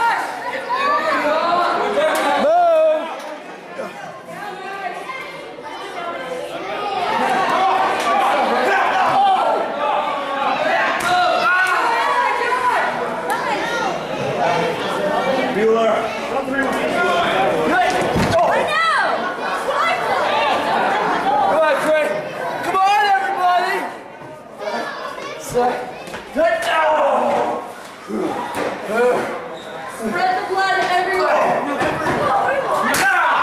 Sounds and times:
Chatter: 0:00.0 - 0:33.4
Inside, large room or hall: 0:00.0 - 0:33.4.

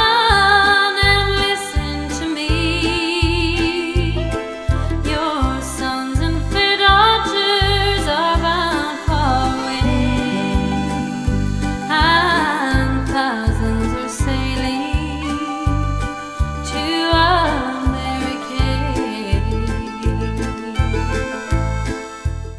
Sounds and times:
Music: 0:00.0 - 0:22.5.

